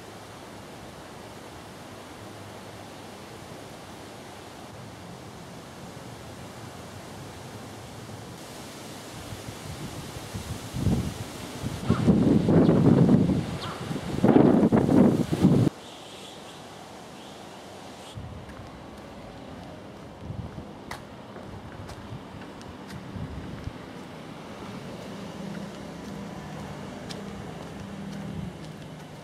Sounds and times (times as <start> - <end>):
Walk, footsteps: 18.4 - 29.2.